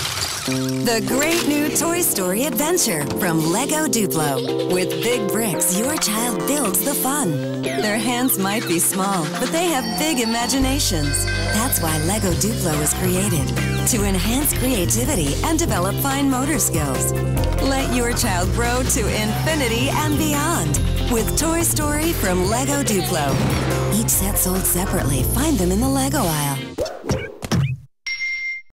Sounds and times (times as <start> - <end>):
Music: 0.3 - 26.8
Speech: 0.9 - 26.7.